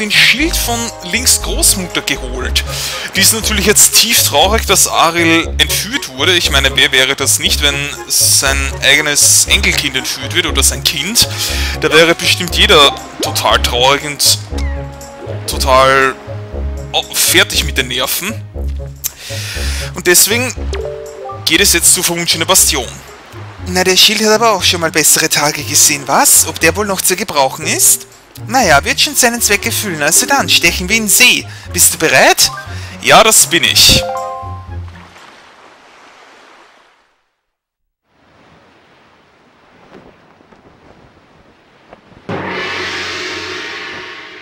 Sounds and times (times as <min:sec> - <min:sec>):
Speech: 0:00.0 - 0:14.5, 0:15.5 - 0:16.2, 0:17.0 - 0:18.4, 0:19.8 - 0:20.6, 0:21.4 - 0:23.0, 0:23.6 - 0:34.1
Music: 0:00.0 - 0:35.2, 0:42.3 - 0:44.4.